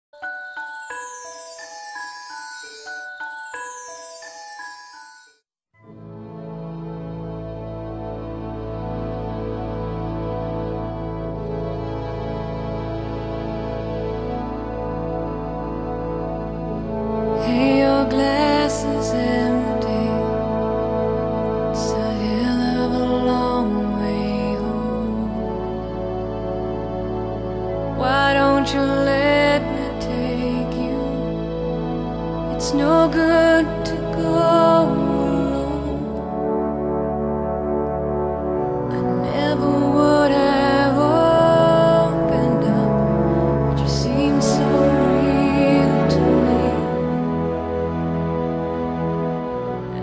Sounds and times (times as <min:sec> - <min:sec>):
Music: 0:00.0 - 0:50.0.